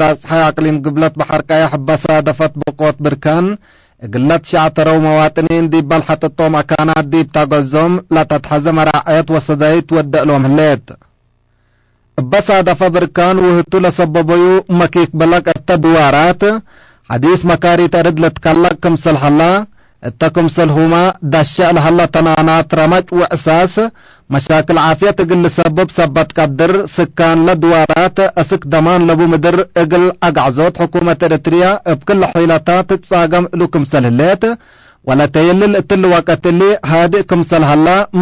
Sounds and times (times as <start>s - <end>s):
Speech: 0.0s - 11.0s, 12.2s - 38.2s.